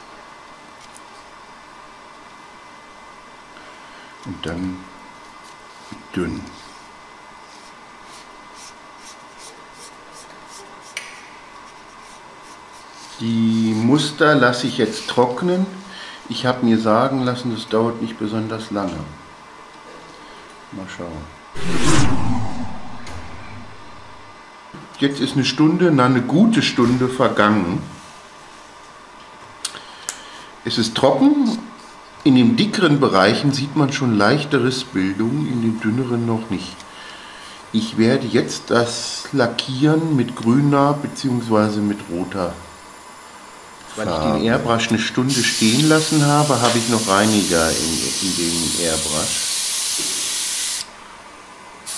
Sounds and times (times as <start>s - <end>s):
Speech: 4.2s - 5.0s, 5.9s - 6.7s, 13.2s - 19.3s, 20.7s - 21.4s, 24.9s - 28.0s, 30.6s - 36.8s, 37.7s - 42.7s, 43.9s - 49.4s.